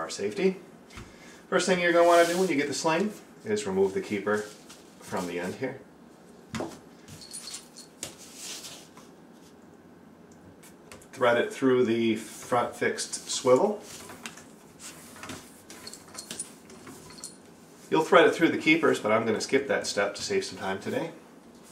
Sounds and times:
Speech: 0:00.0 - 0:00.6, 0:01.5 - 0:05.9, 0:11.1 - 0:13.9, 0:17.9 - 0:21.2
Inside, small room: 0:00.0 - 0:21.7.

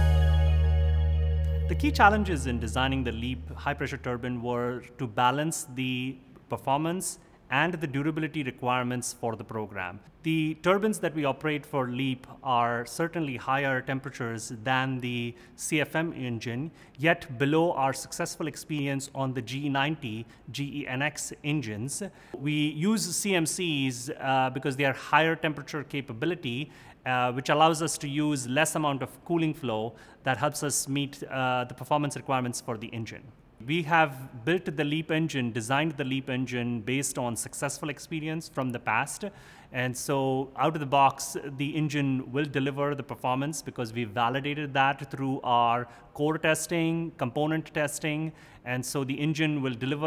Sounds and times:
Speech: 0:01.7 - 0:50.0.

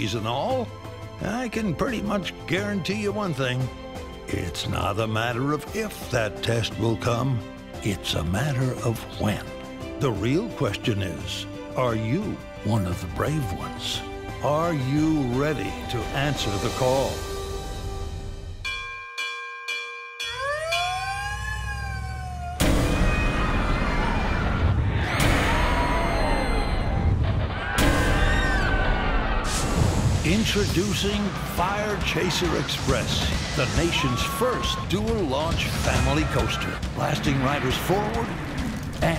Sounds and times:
Police car (siren): 0:20.3 - 0:24.6.

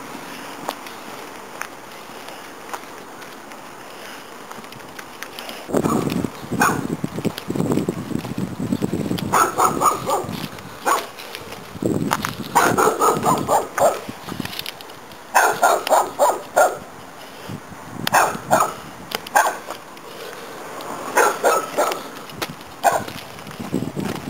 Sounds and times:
Walk, footsteps: 0:00.4 - 0:16.0, 0:19.1 - 0:24.2.

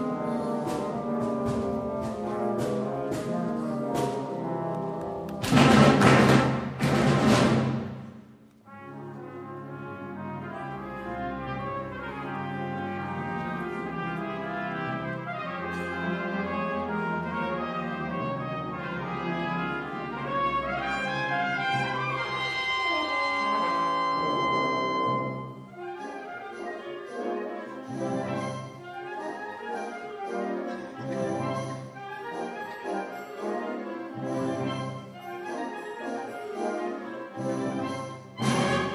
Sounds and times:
French horn: 0:00.0 - 0:06.2, 0:08.6 - 0:38.9
Orchestra: 0:00.0 - 0:38.9.

